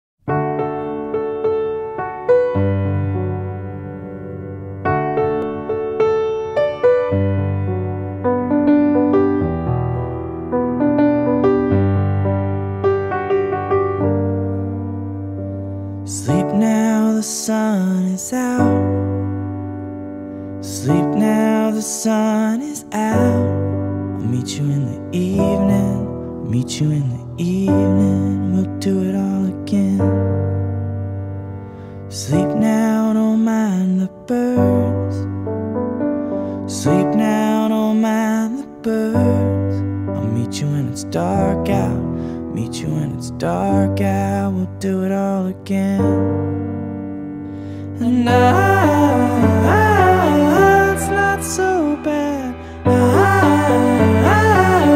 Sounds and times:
Electric piano: 0.2 - 54.9.

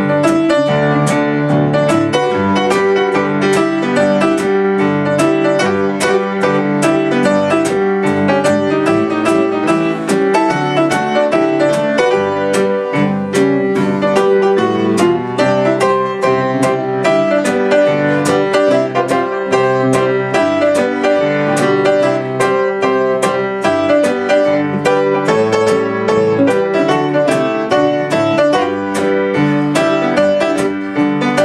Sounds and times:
Music: 0.0 - 31.4.

